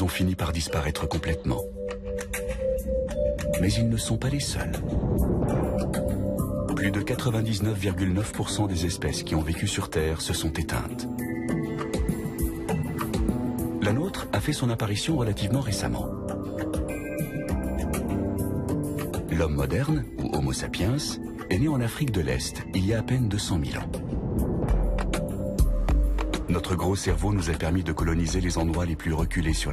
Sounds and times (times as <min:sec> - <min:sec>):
Speech: 0:00.0 - 0:01.7, 0:03.6 - 0:05.0, 0:06.7 - 0:11.1, 0:13.8 - 0:16.2, 0:19.3 - 0:24.0, 0:26.5 - 0:29.7
Music: 0:00.0 - 0:29.7.